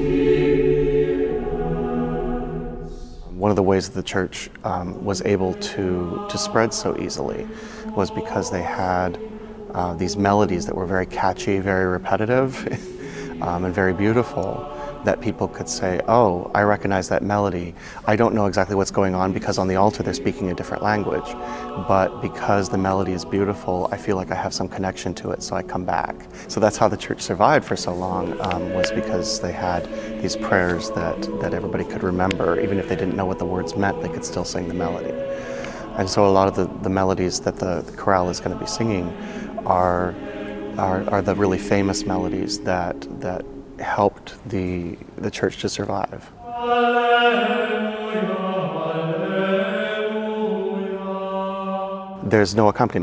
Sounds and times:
Music: 0.0s - 45.2s, 46.4s - 53.0s
Speech: 3.3s - 35.2s, 35.9s - 40.2s, 40.8s - 46.3s, 52.2s - 53.0s.

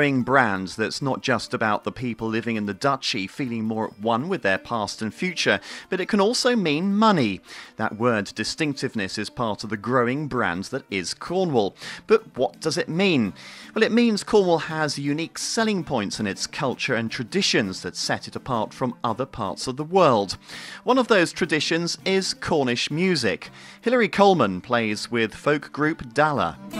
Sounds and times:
Speech: 0.0s - 26.7s.

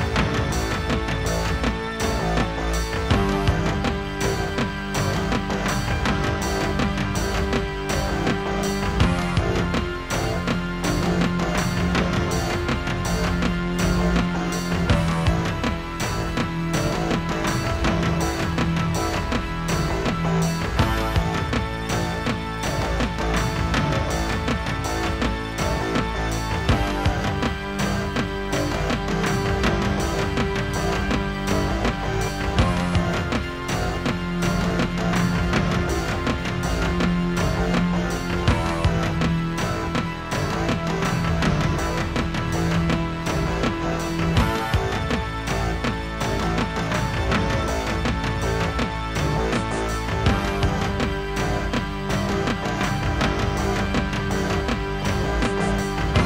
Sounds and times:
Music: 0.0s - 56.2s.

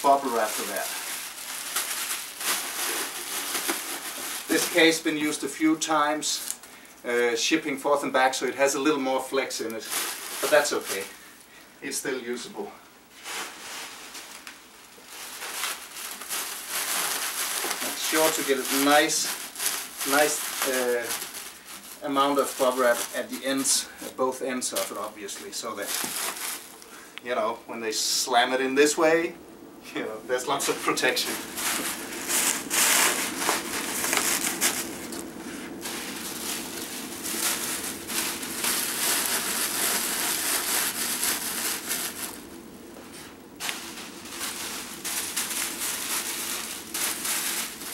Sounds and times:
Speech: 0.0s - 1.0s, 4.5s - 11.1s, 11.8s - 12.8s, 17.8s - 19.4s, 20.0s - 21.2s, 22.0s - 26.0s, 27.2s - 31.4s
Inside, small room: 0.0s - 47.9s.

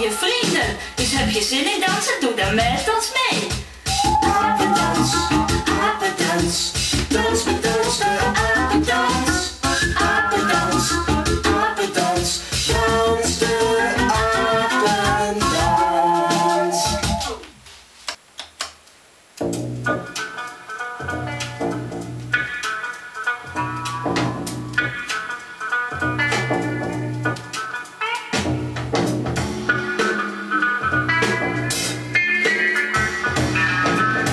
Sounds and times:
Music: 0.0s - 17.5s, 19.4s - 34.3s.

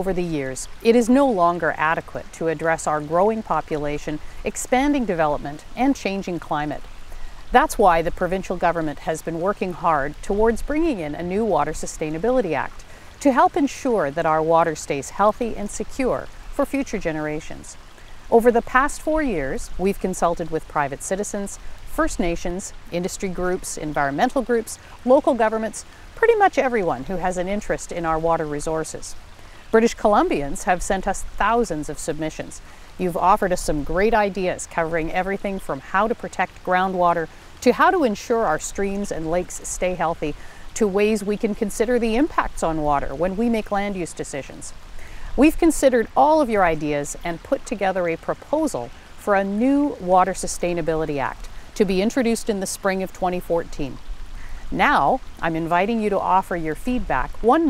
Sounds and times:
Stream: 0.0s - 57.7s.

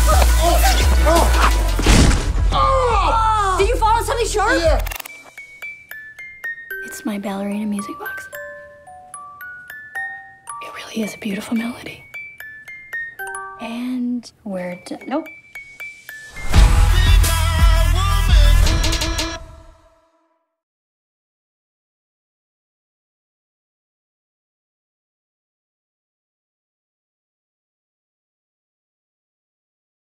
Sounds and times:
Glockenspiel: 5.3s - 16.7s.

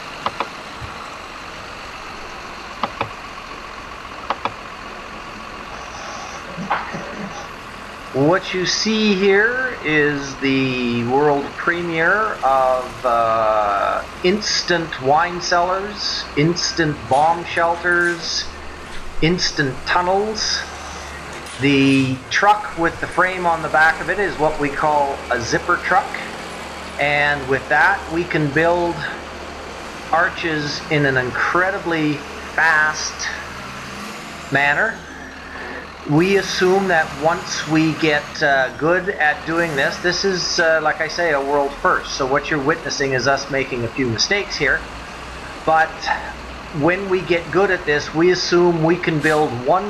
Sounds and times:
Speech: 5.8s - 7.5s, 8.1s - 26.4s, 27.0s - 29.2s, 30.2s - 33.5s, 34.5s - 44.9s, 45.6s - 49.8s.

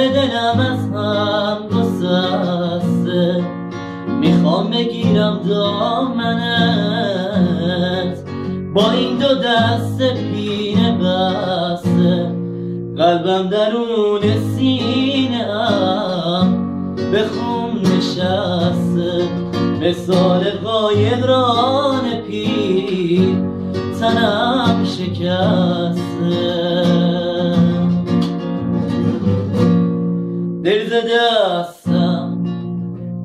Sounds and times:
Acoustic guitar: 0.0s - 33.2s.

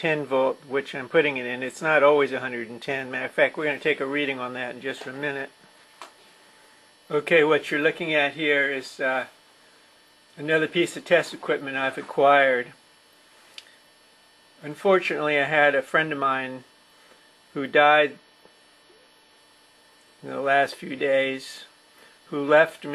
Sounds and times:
Speech: 0.0s - 5.6s, 7.1s - 9.3s, 10.4s - 12.8s, 14.6s - 16.7s, 17.5s - 18.2s, 20.2s - 22.9s.

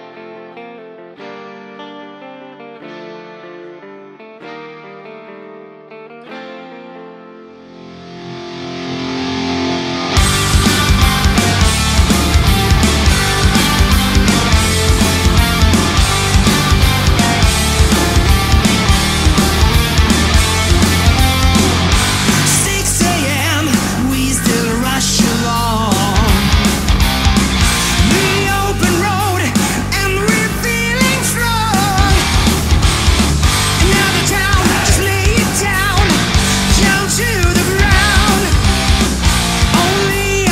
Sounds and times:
Heavy metal: 7.8s - 40.5s.

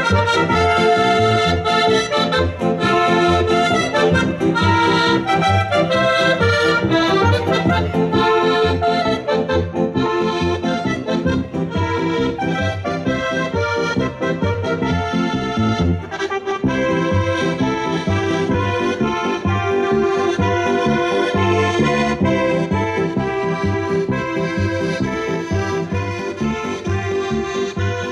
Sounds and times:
Accordion: 0.0s - 28.1s.

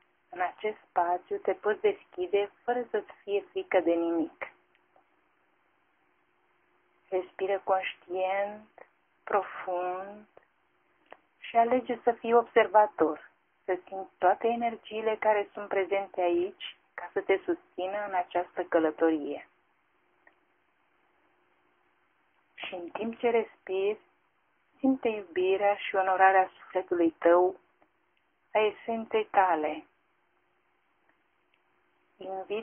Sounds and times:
Speech: 0.4s - 4.6s, 7.1s - 10.4s, 11.4s - 19.5s, 22.6s - 24.1s, 24.8s - 27.6s, 28.6s - 29.9s, 32.2s - 32.6s.

